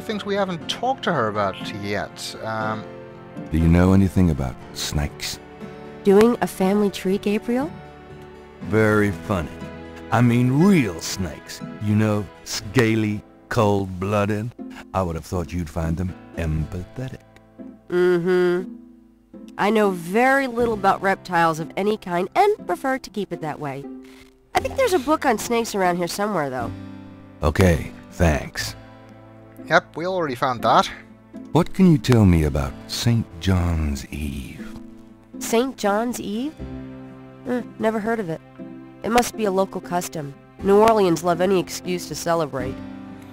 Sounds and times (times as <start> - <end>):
Speech: 0.0 - 2.8, 3.5 - 5.4, 8.7 - 9.6, 10.2 - 17.2, 19.6 - 23.8, 24.6 - 26.7, 27.4 - 28.8, 29.7 - 31.0, 31.6 - 34.7, 39.1 - 42.8
Music: 0.0 - 43.3.